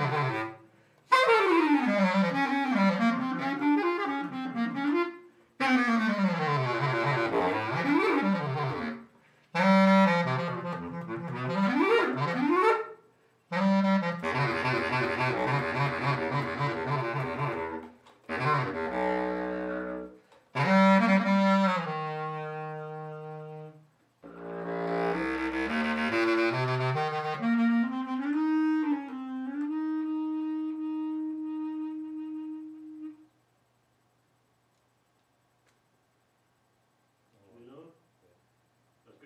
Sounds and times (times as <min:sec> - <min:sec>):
Brass instrument: 0:00.0 - 0:33.3.